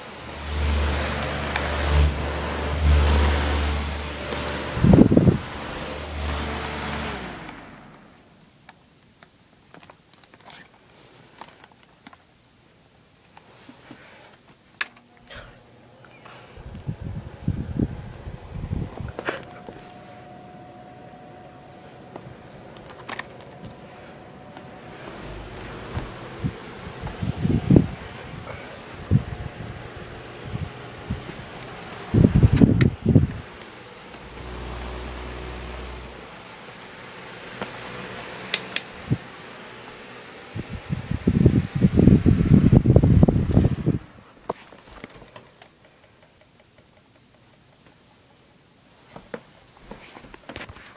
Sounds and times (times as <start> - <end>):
Mechanical fan: 0.0 - 8.8, 13.1 - 50.9.